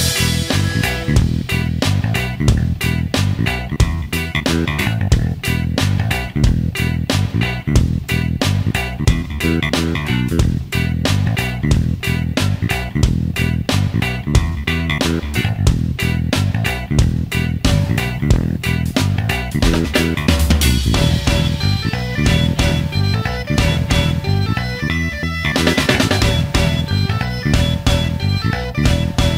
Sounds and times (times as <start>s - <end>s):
Music: 0.0s - 29.3s.